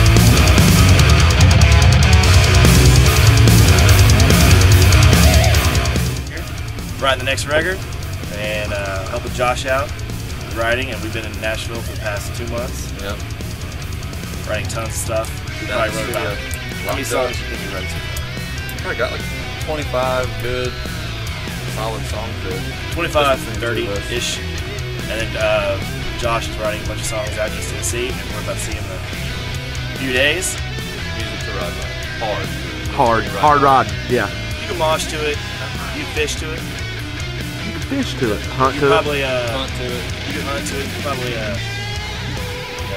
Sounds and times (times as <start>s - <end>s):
Music: 0.0s - 42.9s
Speech: 6.3s - 9.9s, 10.5s - 13.2s, 14.5s - 17.9s, 18.8s - 20.8s, 21.8s - 24.4s, 25.0s - 29.0s, 30.0s - 30.6s, 31.2s - 36.6s, 37.7s - 41.6s.